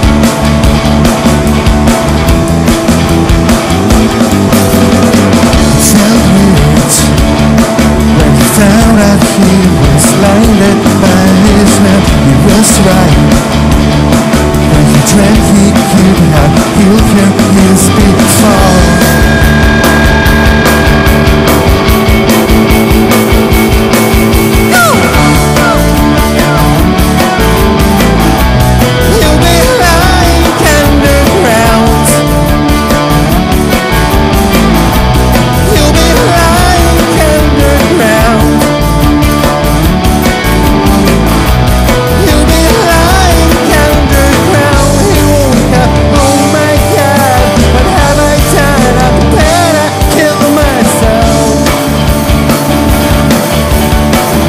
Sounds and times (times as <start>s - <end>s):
Progressive rock: 0.0s - 54.4s
Singing: 42.2s - 51.6s.